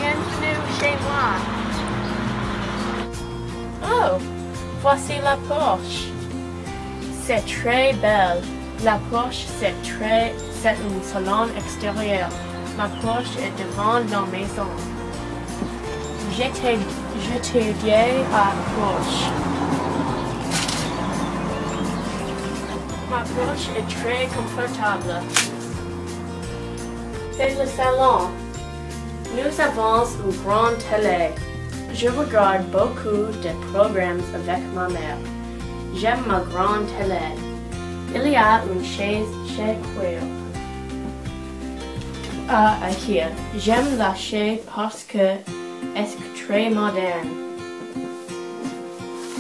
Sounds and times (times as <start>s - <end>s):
Speech: 0.0s - 1.6s, 3.8s - 6.1s, 7.2s - 14.9s, 16.2s - 19.4s, 23.1s - 25.3s, 27.4s - 28.4s, 29.3s - 35.3s, 36.0s - 37.4s, 38.1s - 40.3s, 42.4s - 47.4s
Music: 0.0s - 49.4s.